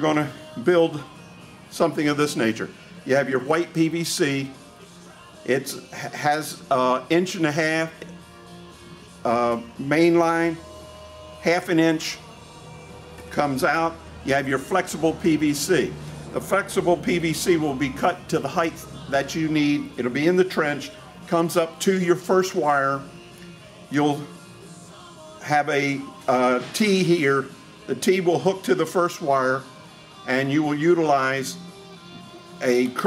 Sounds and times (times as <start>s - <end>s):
Speech: 0.0s - 1.1s, 1.7s - 4.6s, 5.5s - 8.0s, 9.3s - 10.6s, 11.4s - 12.2s, 13.3s - 23.0s, 23.9s - 24.3s, 25.4s - 29.6s, 30.3s - 31.6s, 32.6s - 33.0s
Music: 0.0s - 33.0s.